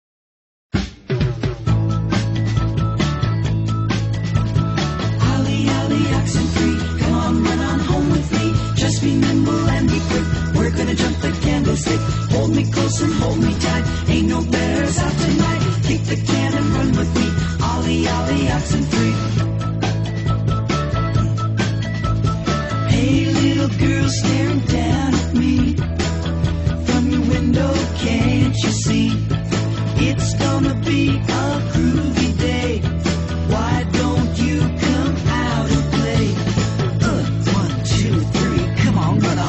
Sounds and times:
Music: 0.7 - 39.4.

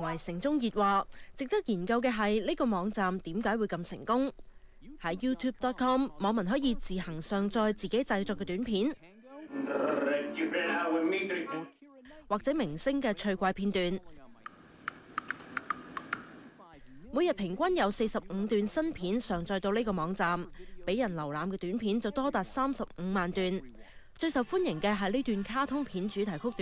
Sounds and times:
Speech: 0.0 - 14.5, 16.6 - 26.6.

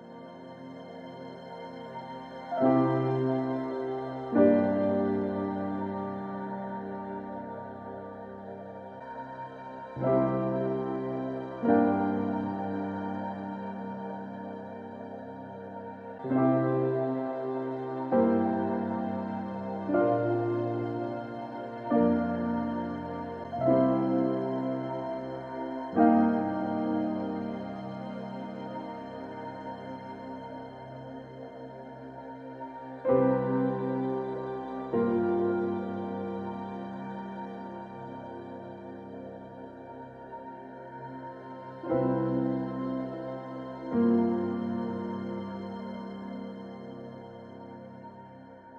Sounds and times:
Music: 0.0 - 48.7.

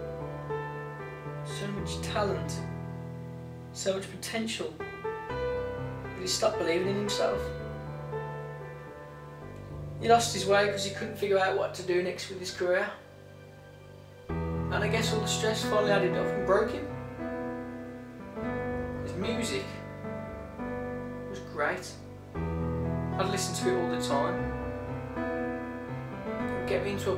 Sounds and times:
Music: 0.0 - 27.1
Narration, monologue: 0.0 - 27.1.

